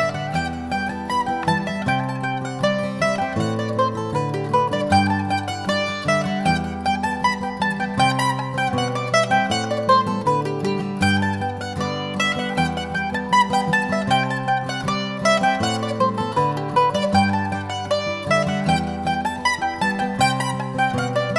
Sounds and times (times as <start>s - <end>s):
Mandolin: 0.0s - 21.3s.